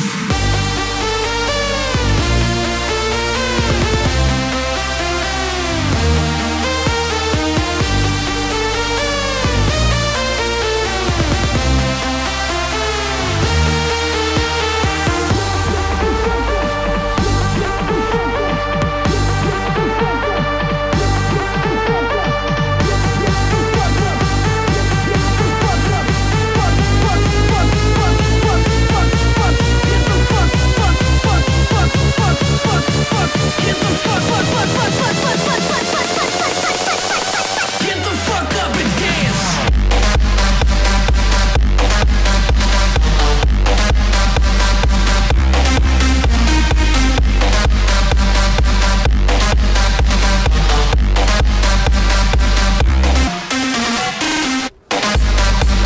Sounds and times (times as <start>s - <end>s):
Electronic dance music: 0.0s - 55.8s.